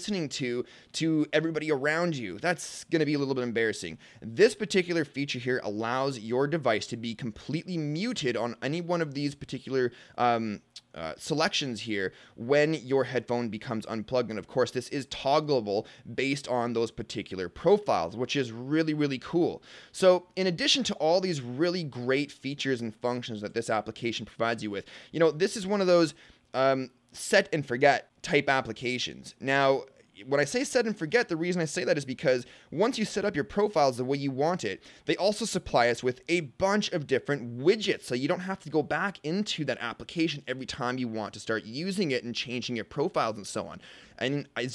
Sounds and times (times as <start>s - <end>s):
Speech: 0.0s - 44.7s.